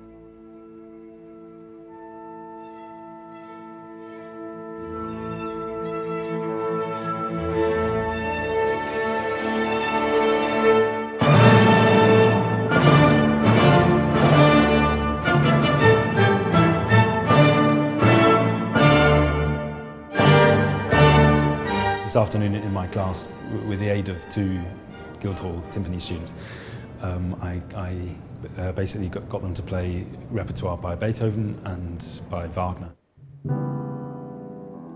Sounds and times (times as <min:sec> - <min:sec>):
Timpani: 0:00.0 - 0:27.0
Piano: 0:00.0 - 0:30.6, 0:33.2 - 0:34.9
Speech: 0:22.0 - 0:26.4, 0:27.0 - 0:33.0.